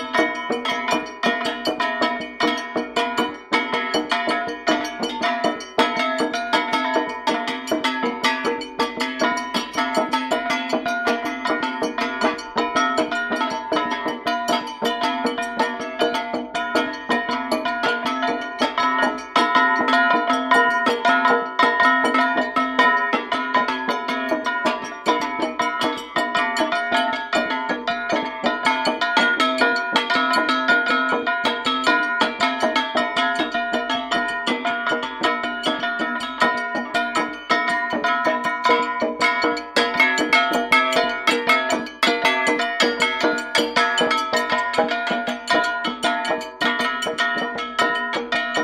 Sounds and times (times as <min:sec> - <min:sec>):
Music: 0:00.0 - 0:48.6.